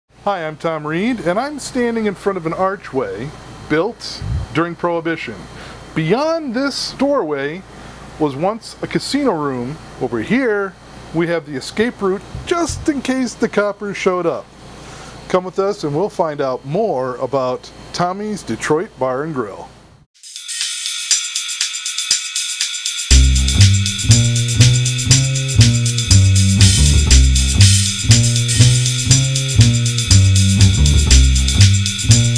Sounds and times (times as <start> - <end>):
Speech: 0.2 - 14.5, 15.3 - 19.8.